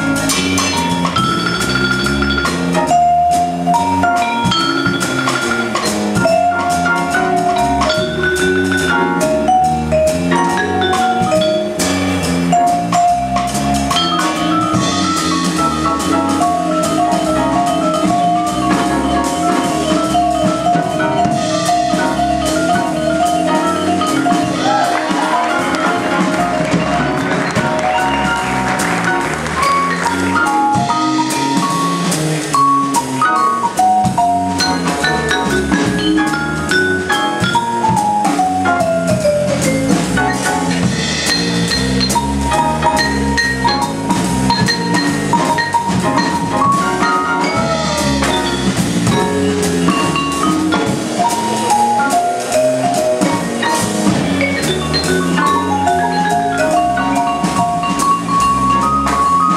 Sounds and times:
Marimba, xylophone: 0:00.0 - 0:59.5
Glockenspiel: 0:00.1 - 0:24.7, 0:32.8 - 0:59.5.

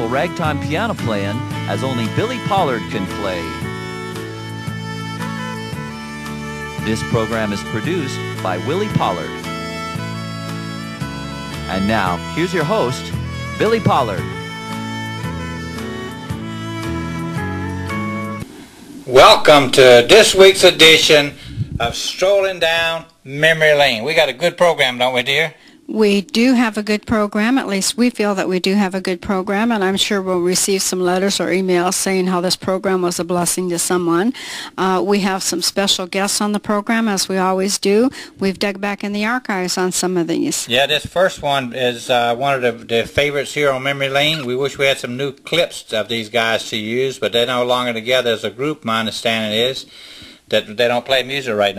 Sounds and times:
Speech: 0:00.0 - 0:03.6, 0:06.8 - 0:09.4, 0:11.7 - 0:14.3, 0:19.1 - 0:49.9, 0:50.5 - 0:51.7
Gospel music: 0:00.0 - 0:23.2.

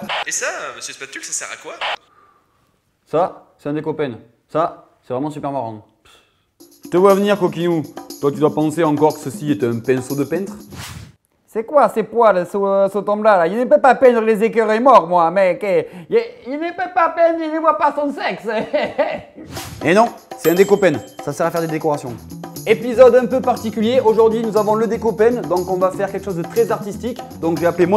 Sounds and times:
Speech: 0:00.2 - 0:02.0, 0:03.1 - 0:06.0, 0:06.9 - 0:10.6, 0:11.5 - 0:18.7, 0:19.8 - 0:27.9
Music: 0:06.6 - 0:10.8, 0:19.5 - 0:27.9.

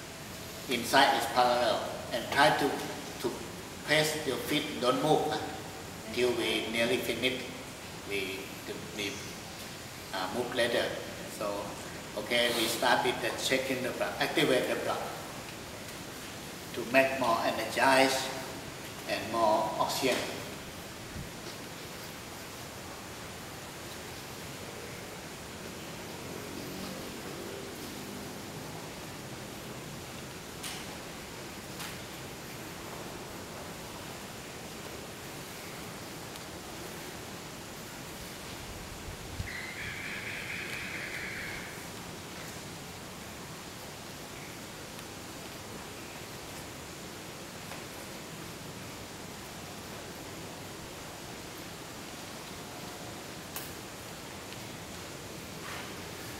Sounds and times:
Speech: 0:00.7 - 0:09.3, 0:10.2 - 0:15.2, 0:16.7 - 0:18.5, 0:19.1 - 0:20.6.

